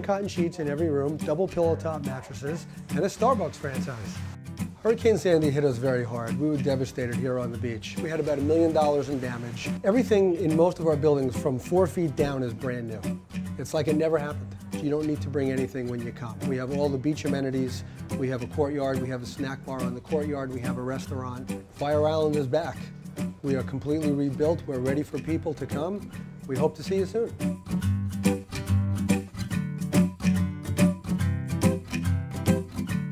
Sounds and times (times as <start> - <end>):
Speech: 0.0 - 4.2, 4.8 - 27.4
Music: 0.0 - 33.1.